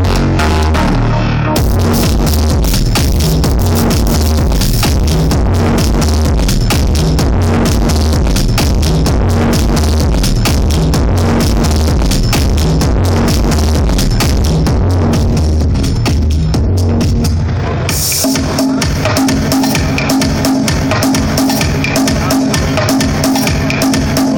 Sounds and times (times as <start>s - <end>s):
Music: 0.0s - 24.3s.